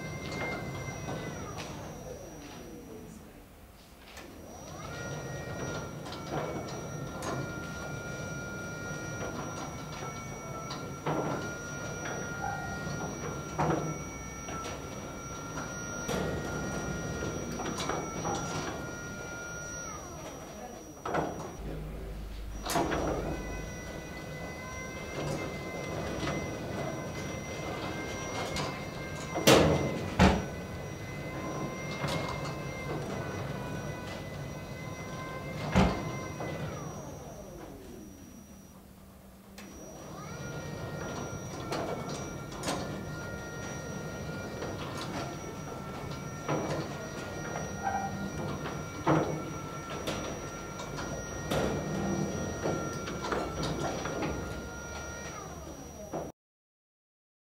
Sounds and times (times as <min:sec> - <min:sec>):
Sliding door: 0:00.0 - 0:02.6, 0:04.1 - 0:37.7, 0:39.6 - 0:56.3.